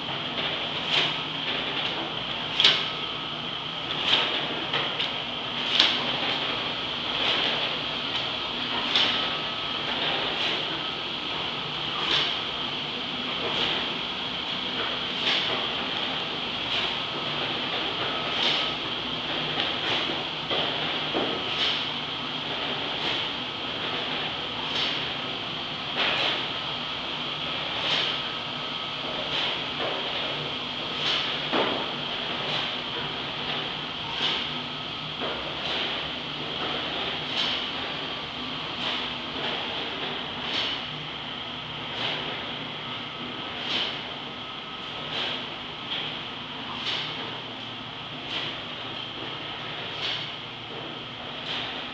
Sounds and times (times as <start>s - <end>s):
Heavy engine (low frequency): 0.0s - 51.9s.